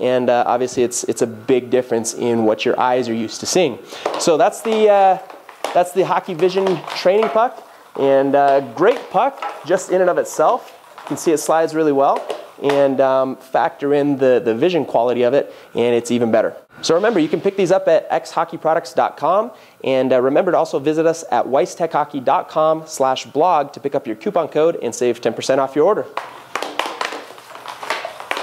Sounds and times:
Speech: 0.0 - 26.2
Inside, small room: 0.0 - 28.4.

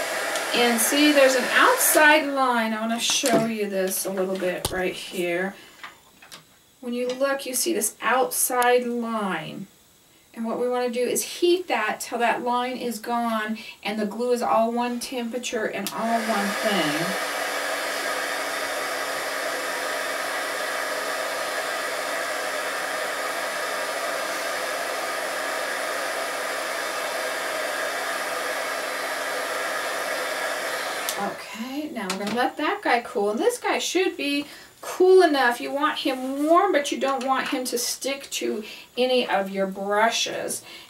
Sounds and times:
Inside, small room: 0.0 - 40.9
Speech: 0.6 - 5.6, 6.8 - 9.7, 10.4 - 17.2, 31.2 - 40.6.

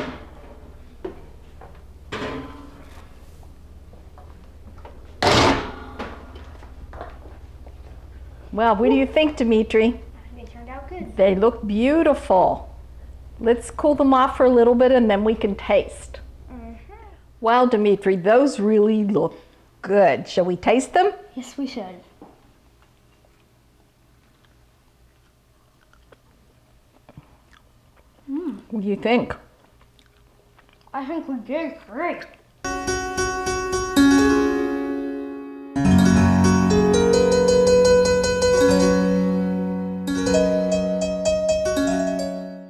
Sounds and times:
Speech: 31.0 - 32.4
Harpsichord: 32.7 - 42.6.

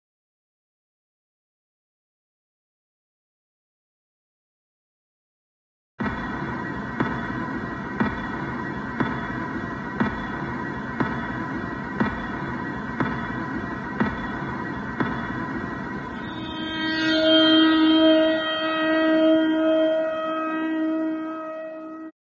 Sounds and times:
Music: 6.0 - 22.1.

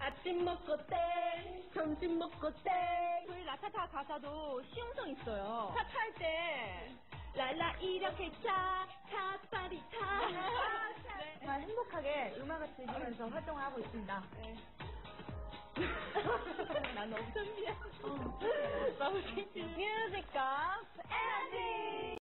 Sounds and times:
Music: 0.0 - 22.2.

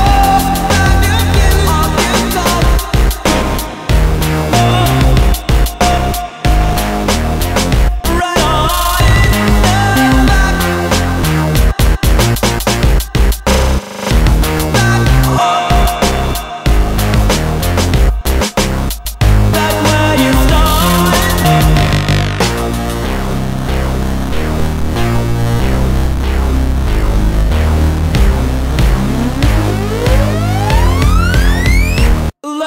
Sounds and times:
Drum and bass: 0.0 - 32.4.

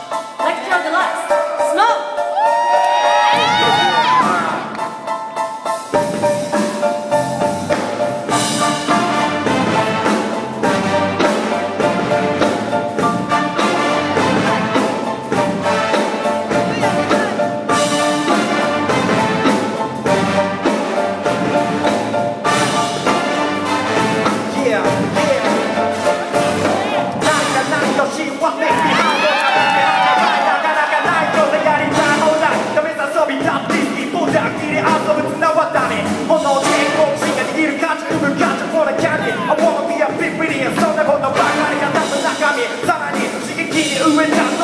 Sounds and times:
Music: 0.0 - 44.6.

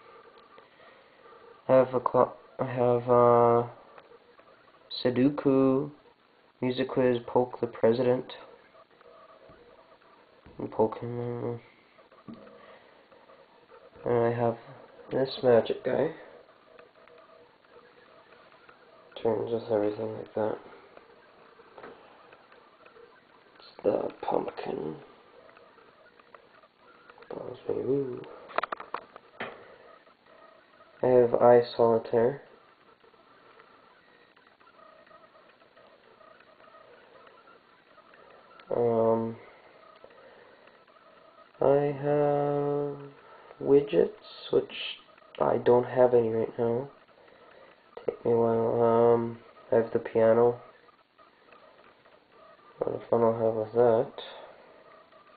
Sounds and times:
Speech: 1.7 - 3.8, 4.9 - 6.0, 6.6 - 8.5, 10.6 - 11.7, 14.0 - 16.4, 19.2 - 20.7, 23.6 - 25.1, 27.3 - 28.3, 31.0 - 32.5, 38.7 - 39.5, 41.6 - 47.0, 48.0 - 50.7, 52.8 - 54.5.

